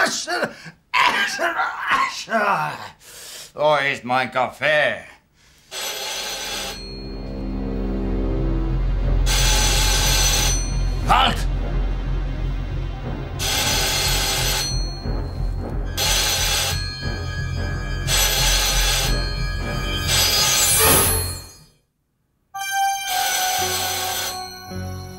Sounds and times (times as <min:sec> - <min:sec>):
Music: 0:06.9 - 0:21.7, 0:22.6 - 0:25.1.